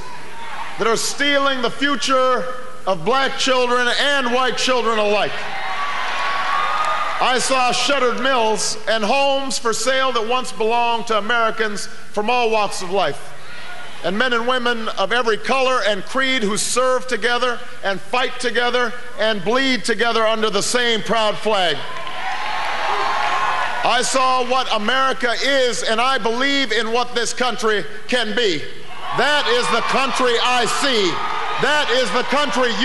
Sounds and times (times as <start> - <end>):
Male speech, man speaking: 0.8 - 5.4, 7.2 - 13.2, 14.0 - 21.9, 23.9 - 32.8
Narration, monologue: 0.8 - 5.5, 7.0 - 22.1, 23.7 - 32.8.